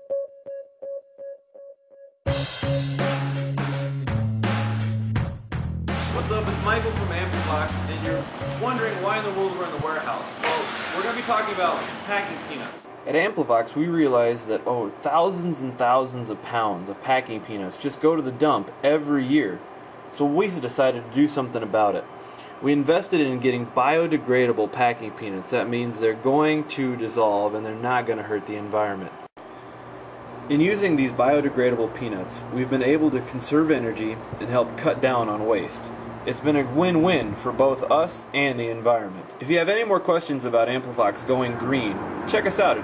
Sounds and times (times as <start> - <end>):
Speech: 6.0 - 29.1, 30.5 - 42.8.